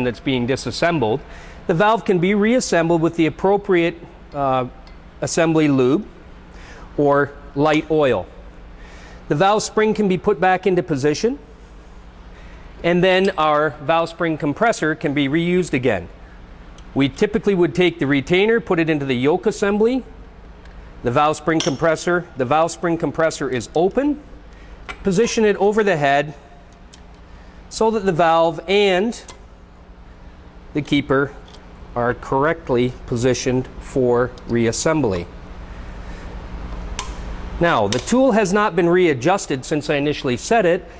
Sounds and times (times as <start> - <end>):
Speech: 0.0 - 6.1, 7.0 - 8.3, 9.3 - 11.5, 12.8 - 16.2, 17.0 - 20.2, 21.0 - 24.3, 25.0 - 26.4, 27.7 - 29.3, 30.7 - 31.4, 32.0 - 35.3, 37.6 - 40.9.